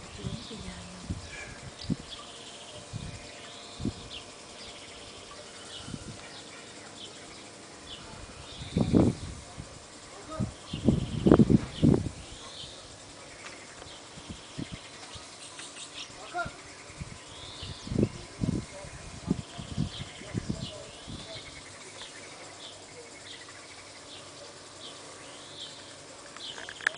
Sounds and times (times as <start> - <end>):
Speech: 0.2 - 1.1, 9.4 - 10.6, 18.1 - 21.6.